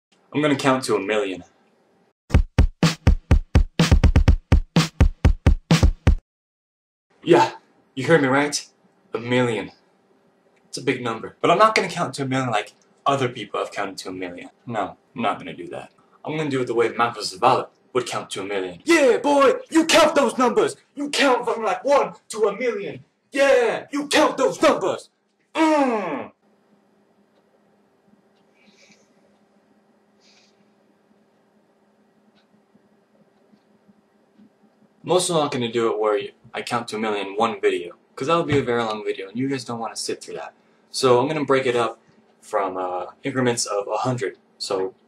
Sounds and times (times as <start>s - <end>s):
Inside, small room: 0.1s - 6.2s, 7.1s - 45.0s
Speech: 0.4s - 1.5s, 7.2s - 8.6s, 9.2s - 9.7s, 10.8s - 25.0s, 25.6s - 26.3s, 35.1s - 44.9s
Music: 2.3s - 6.2s.